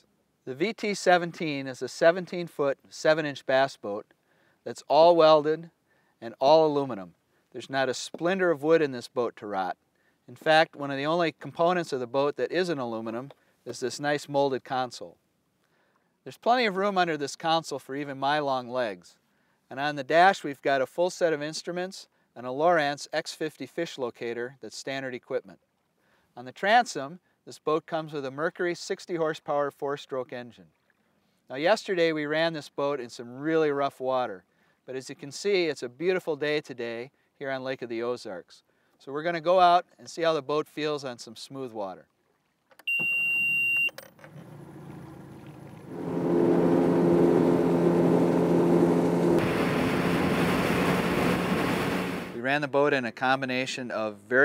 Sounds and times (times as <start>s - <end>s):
Speech: 0.5s - 4.1s, 4.7s - 15.2s, 16.3s - 25.6s, 26.4s - 30.6s, 31.5s - 42.1s, 52.4s - 54.4s.